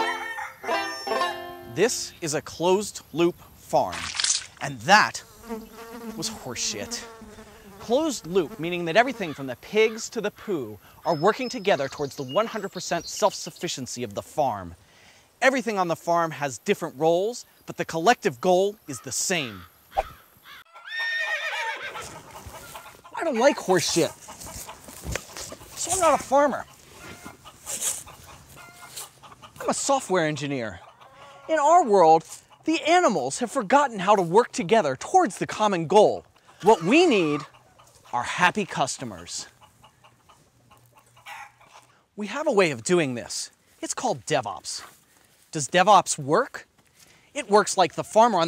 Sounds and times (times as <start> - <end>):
Speech: 1.7 - 5.3, 6.1 - 7.1, 7.8 - 14.8, 15.4 - 19.6, 23.2 - 24.2, 25.8 - 26.7, 29.6 - 30.8, 31.5 - 37.5, 38.1 - 39.5, 42.2 - 44.9, 45.5 - 46.7, 47.4 - 48.4.